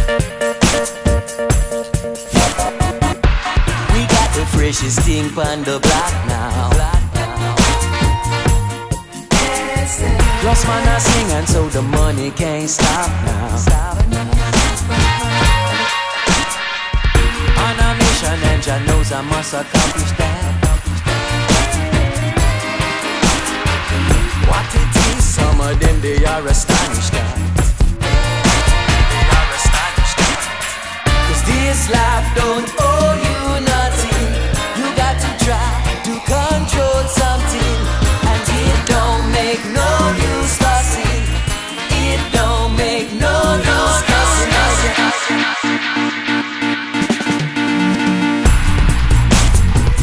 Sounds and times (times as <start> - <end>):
Electronic music: 0.0 - 50.0.